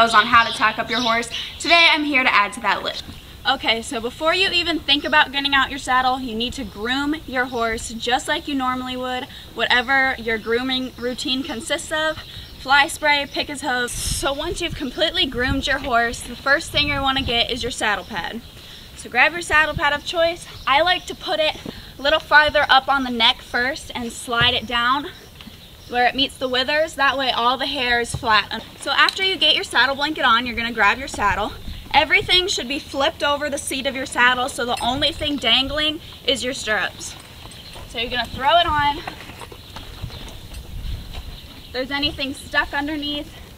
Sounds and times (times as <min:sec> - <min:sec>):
Speech: 0:00.0 - 0:18.4, 0:19.0 - 0:25.2, 0:25.9 - 0:37.2, 0:37.9 - 0:39.1, 0:41.8 - 0:43.4.